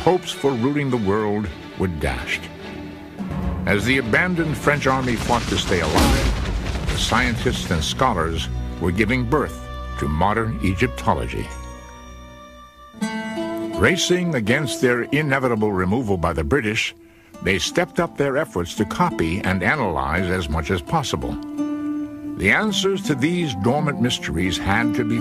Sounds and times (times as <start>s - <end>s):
Speech: 0.0s - 2.5s, 3.7s - 6.4s, 7.0s - 11.6s, 13.8s - 21.4s, 22.4s - 25.2s
Music: 0.0s - 25.2s.